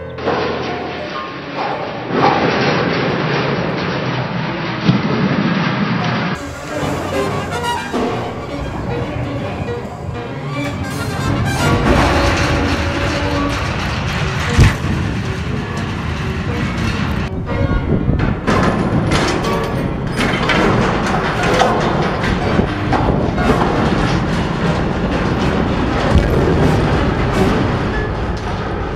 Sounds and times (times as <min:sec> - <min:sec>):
Music: 0:00.0 - 0:02.5, 0:06.4 - 0:24.0, 0:26.1 - 0:28.9.